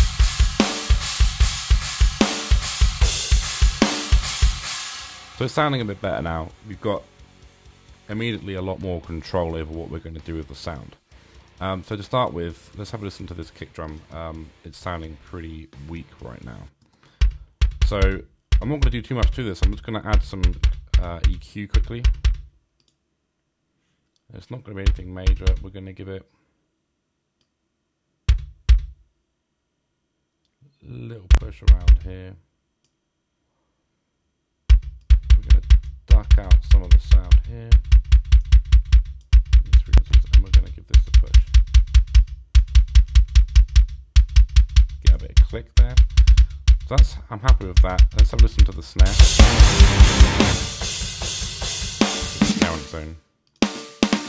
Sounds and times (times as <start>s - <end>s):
Drum machine: 0.0s - 16.4s, 17.2s - 22.5s, 24.8s - 25.6s, 28.3s - 29.0s, 31.3s - 32.2s, 34.7s - 54.2s.